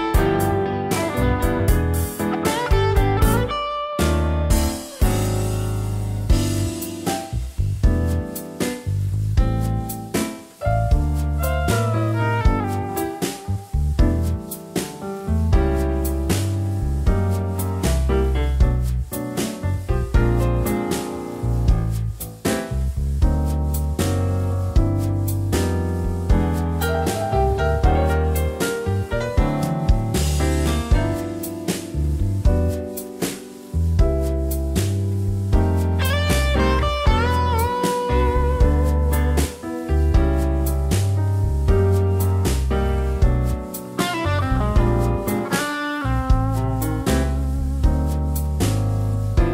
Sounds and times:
Music: 0:00.0 - 0:49.5.

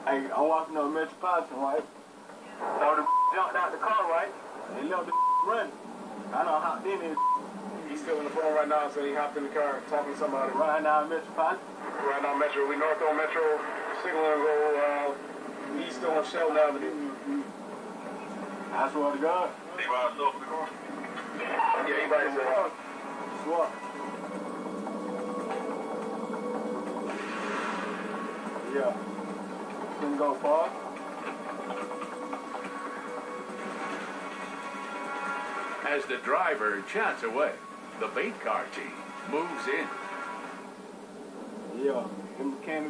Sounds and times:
Music: 0:06.0 - 0:42.9.

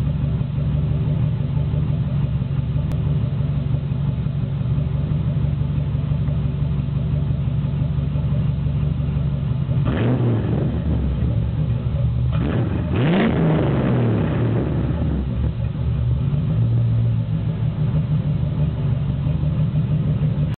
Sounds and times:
Vehicle: 0:00.0 - 0:20.5
Accelerating, revving, vroom: 0:09.8 - 0:11.2, 0:12.3 - 0:15.3.

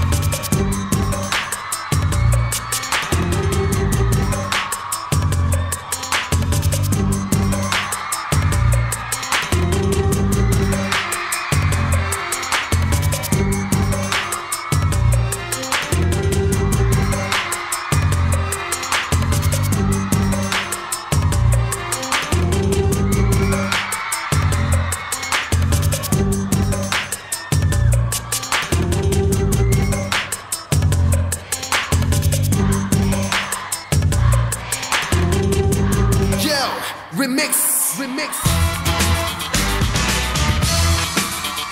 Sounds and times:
Music: 0:00.0 - 0:41.7.

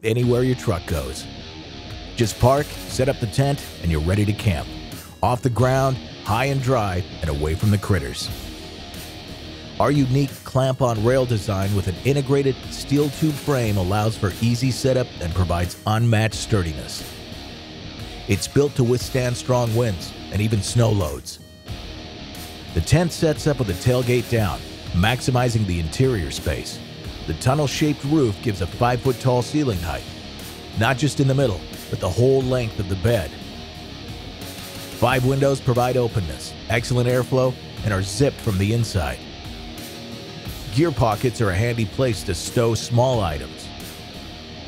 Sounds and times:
Speech: 0:00.0 - 0:01.3, 0:02.2 - 0:08.3, 0:09.8 - 0:17.0, 0:18.3 - 0:21.4, 0:22.8 - 0:30.1, 0:30.8 - 0:33.4, 0:35.0 - 0:39.2, 0:40.6 - 0:43.7
Music: 0:00.0 - 0:44.6.

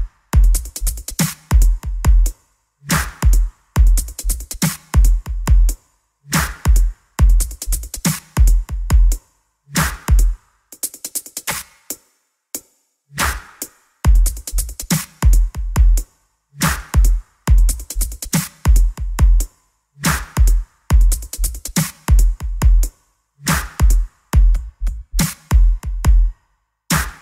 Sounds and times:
Drum: 0:00.0 - 0:05.8, 0:06.4 - 0:09.2, 0:09.8 - 0:11.9, 0:13.2 - 0:19.5, 0:20.1 - 0:27.2.

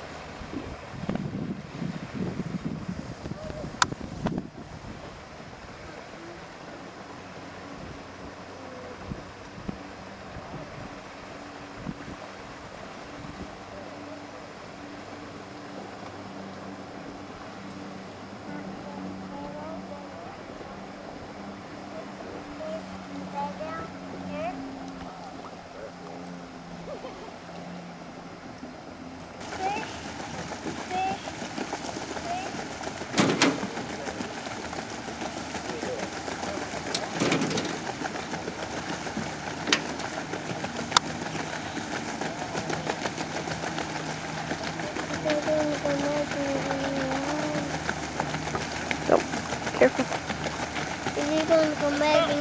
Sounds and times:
Motorboat, speedboat: 0:00.0 - 0:52.4.

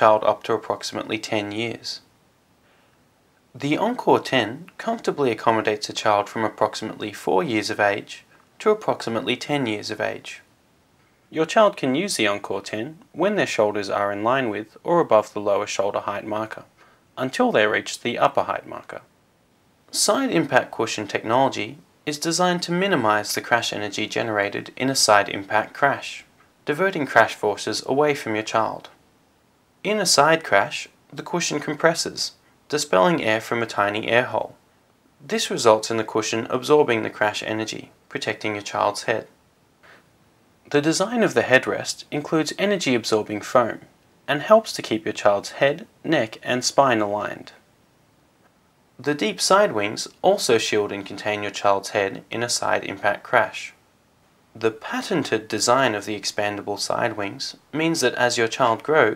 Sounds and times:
Speech: 0:00.0 - 0:02.1, 0:03.6 - 0:10.5, 0:11.3 - 0:19.1, 0:19.9 - 0:29.0, 0:29.8 - 0:34.6, 0:35.2 - 0:39.4, 0:40.7 - 0:47.6, 0:49.0 - 0:53.8, 0:54.6 - 0:59.1.

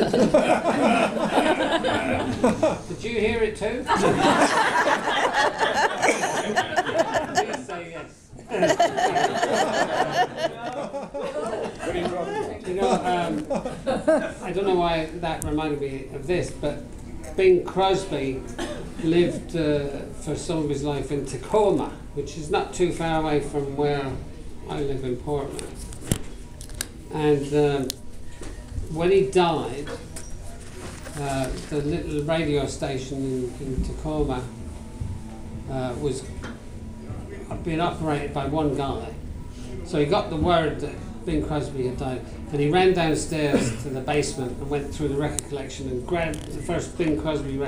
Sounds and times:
Speech: 0:07.2 - 0:08.2, 0:14.4 - 0:25.8, 0:39.9 - 0:47.6.

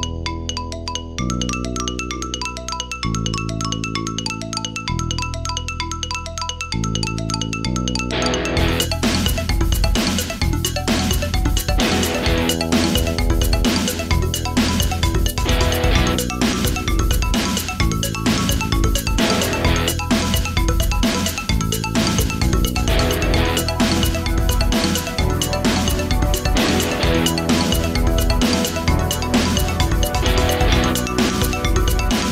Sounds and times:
Music: 0:00.0 - 0:32.3.

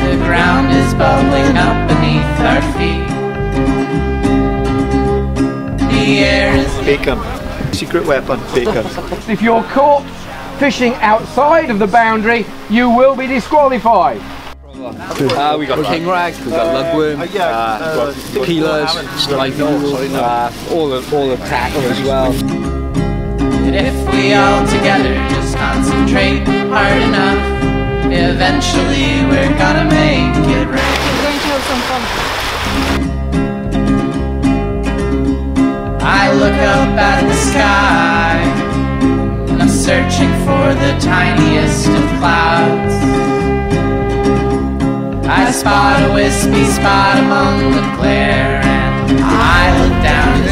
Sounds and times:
Speech: 0:06.8 - 0:22.4.

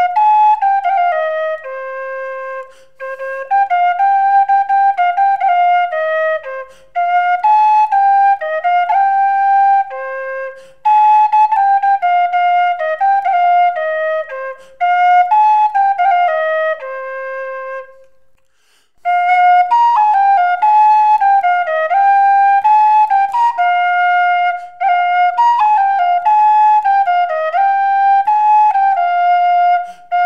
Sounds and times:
Flute: 0:00.0 - 0:30.2.

